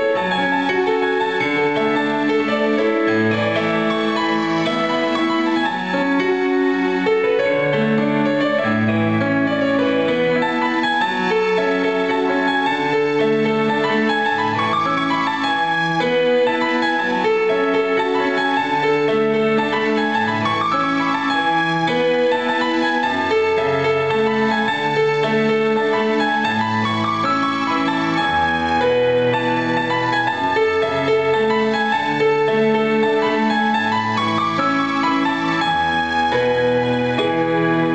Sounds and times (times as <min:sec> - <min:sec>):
Music: 0:00.0 - 0:37.9.